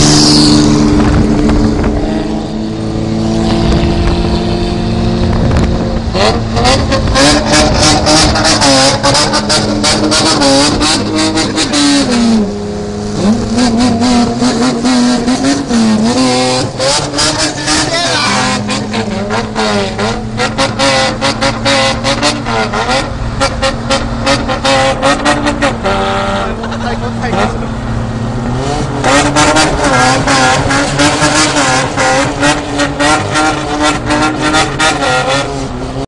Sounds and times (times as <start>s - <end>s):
Speech: 17.7s - 18.4s, 26.4s - 27.6s.